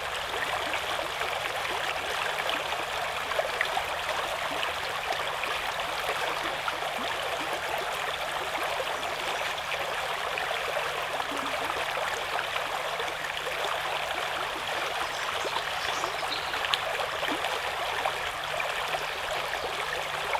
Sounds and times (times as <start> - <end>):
Stream: 0.0 - 20.3
Trickle, dribble: 0.0 - 20.3.